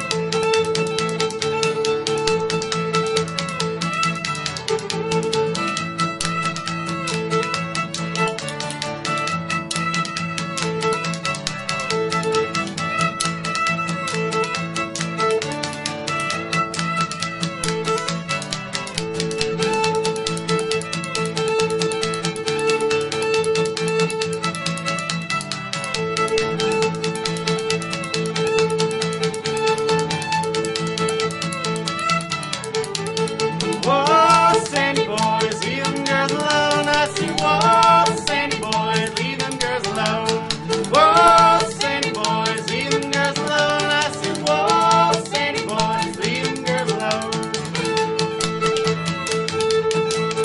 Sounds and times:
Guitar: 0.0 - 50.4
Pizzicato: 0.0 - 50.4.

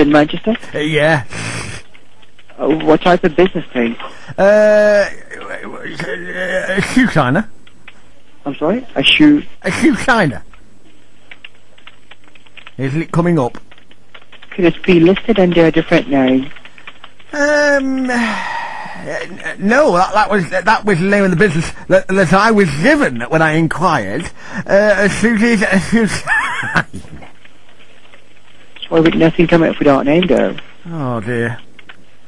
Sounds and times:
Conversation: 0.0 - 32.2
Male speech, man speaking: 0.6 - 1.8, 2.5 - 7.5, 8.5 - 10.4, 12.8 - 13.6, 17.4 - 27.2, 30.4 - 31.6.

